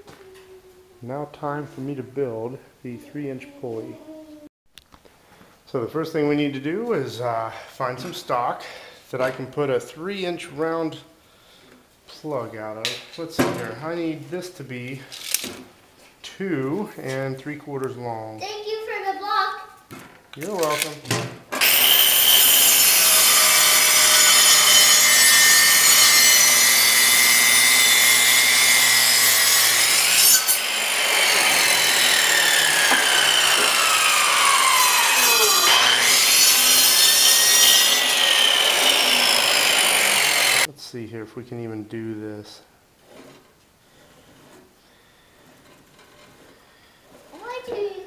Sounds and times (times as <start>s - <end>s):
Wood: 19.9s - 40.7s, 43.0s - 48.0s
Sawing: 21.6s - 40.7s, 43.0s - 48.0s.